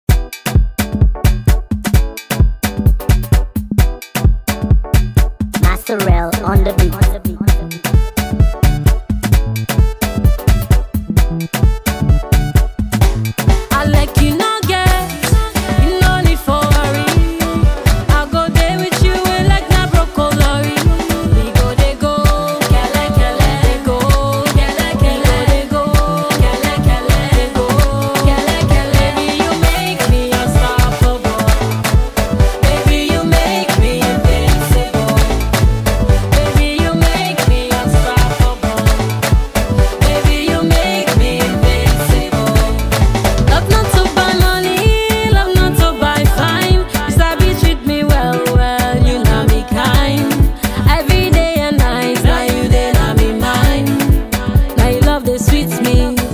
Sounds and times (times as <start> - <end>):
Music: 0.0 - 56.3.